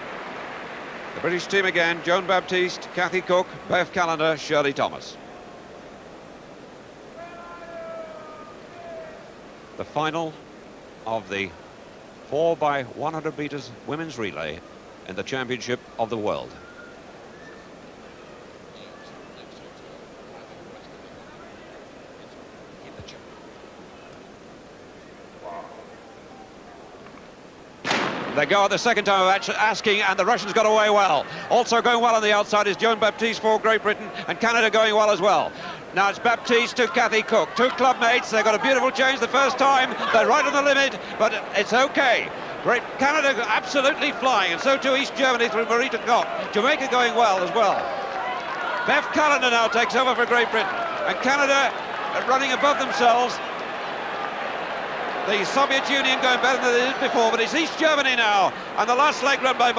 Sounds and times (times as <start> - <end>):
Outside, urban or manmade: 0.0 - 55.3
Speech: 1.2 - 5.2, 11.1 - 11.6, 12.3 - 16.6, 28.4 - 47.9, 48.8 - 53.4, 55.3 - 59.7.